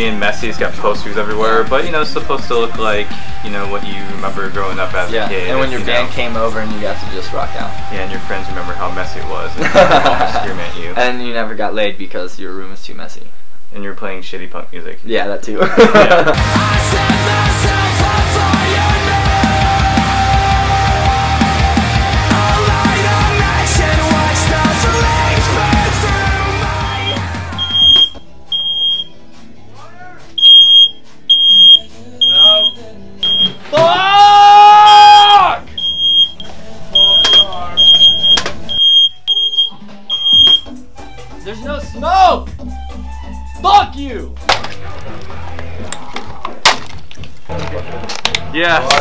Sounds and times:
Music: 0:00.0 - 0:12.0, 0:15.6 - 0:49.0.

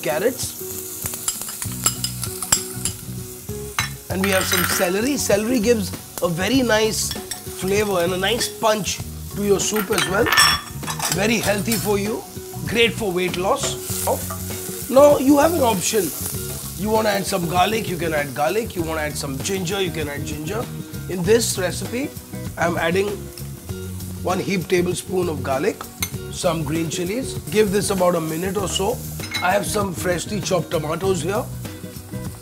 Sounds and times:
Speech: 0:00.0 - 0:00.6, 0:04.1 - 0:10.4, 0:11.2 - 0:14.3, 0:14.9 - 0:16.2, 0:16.8 - 0:23.2, 0:24.2 - 0:31.5
Music: 0:00.0 - 0:32.4.

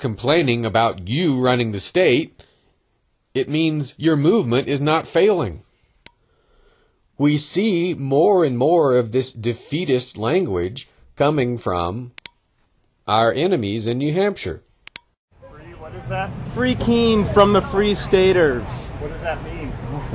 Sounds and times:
Speech: 0:00.0 - 0:02.4, 0:03.4 - 0:05.6, 0:07.2 - 0:12.2, 0:13.1 - 0:14.6, 0:15.4 - 0:20.1.

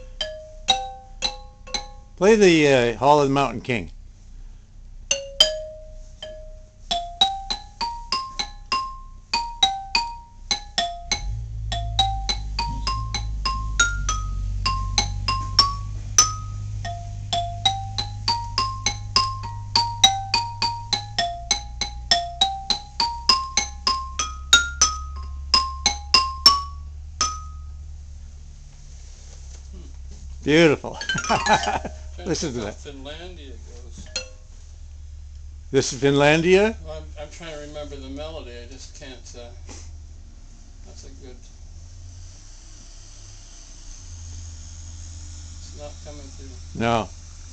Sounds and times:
Marimba, xylophone: 0:00.0 - 0:02.4, 0:05.1 - 0:27.8, 0:31.0 - 0:32.5, 0:34.0 - 0:34.5.

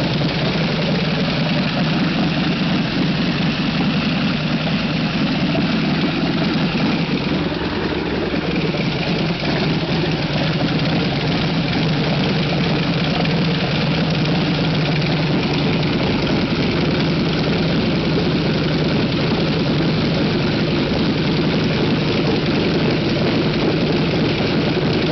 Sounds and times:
Engine: 0:00.0 - 0:25.1
Vehicle: 0:00.0 - 0:25.1.

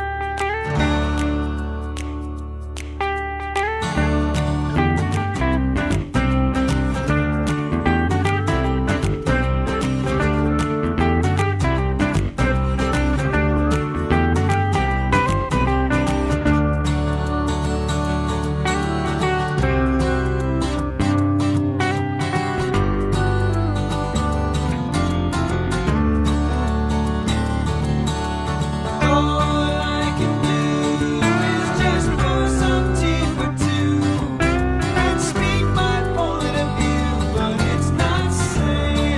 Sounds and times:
Music: 0:00.0 - 0:39.1.

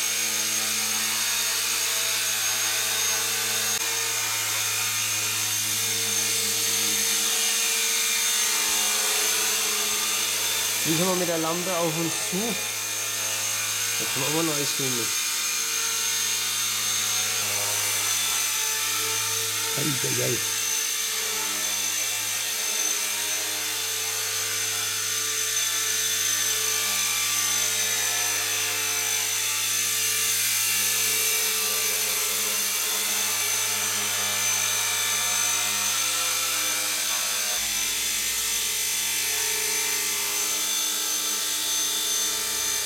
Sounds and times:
Aircraft: 0:00.0 - 0:10.8, 0:12.6 - 0:14.0, 0:15.2 - 0:19.7, 0:20.5 - 0:42.8
Speech: 0:10.8 - 0:12.6, 0:14.0 - 0:15.2, 0:19.8 - 0:20.5.

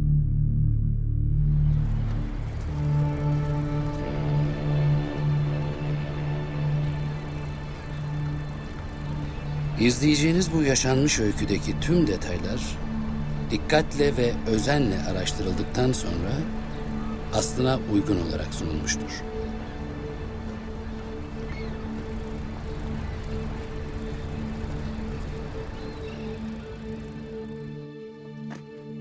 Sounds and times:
Music: 0:00.0 - 0:29.0
Speech: 0:09.8 - 0:12.8, 0:13.5 - 0:16.5, 0:17.3 - 0:19.2.

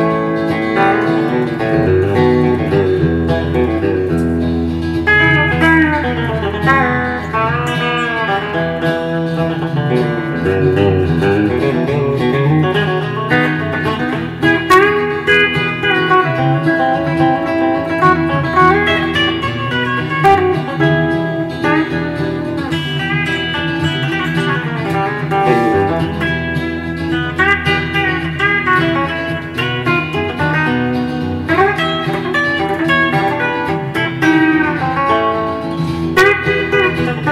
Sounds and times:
Acoustic guitar: 0:00.0 - 0:37.3
Country: 0:00.0 - 0:37.3
Strum: 0:00.0 - 0:37.3.

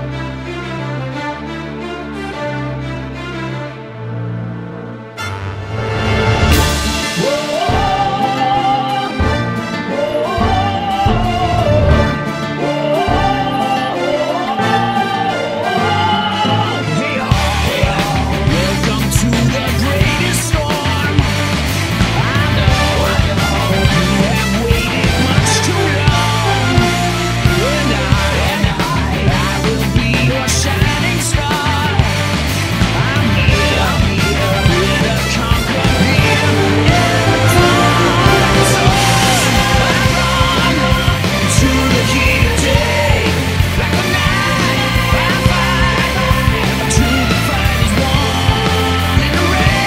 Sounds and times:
Music: 0:00.0 - 0:49.8.

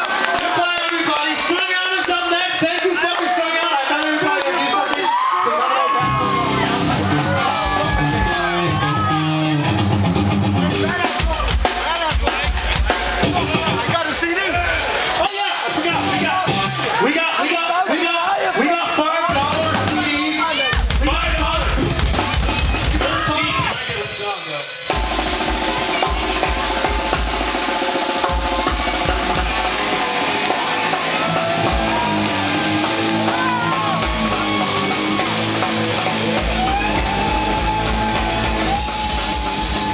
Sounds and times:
Music: 0:05.8 - 0:18.1, 0:18.7 - 0:39.9.

